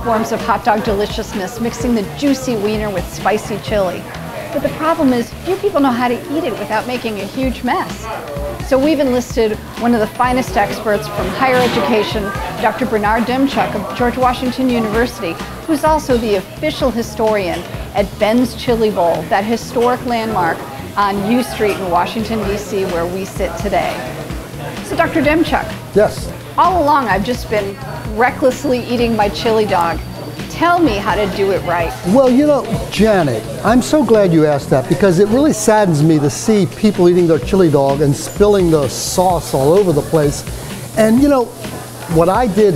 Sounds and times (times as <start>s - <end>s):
Speech: 0.0s - 8.1s, 8.7s - 24.2s, 24.8s - 41.5s, 42.1s - 42.7s
Music: 0.0s - 42.7s.